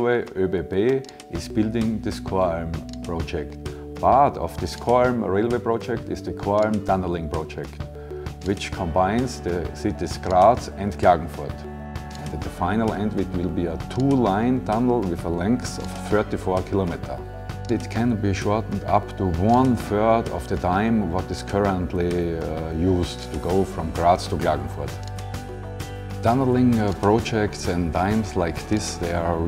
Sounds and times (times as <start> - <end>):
Speech: 0.0 - 7.8, 8.4 - 11.6, 12.3 - 25.0, 26.2 - 29.4
Music: 0.0 - 29.4.